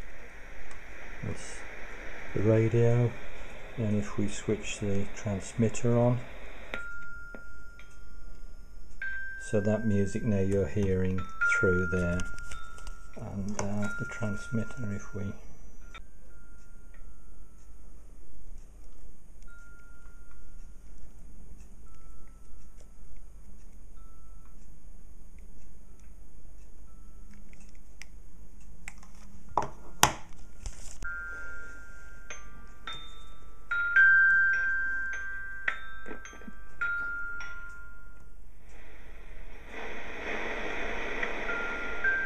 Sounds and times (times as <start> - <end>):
Speech: 1.2 - 1.7, 2.4 - 3.2, 3.8 - 6.3, 9.4 - 12.3, 13.2 - 15.4.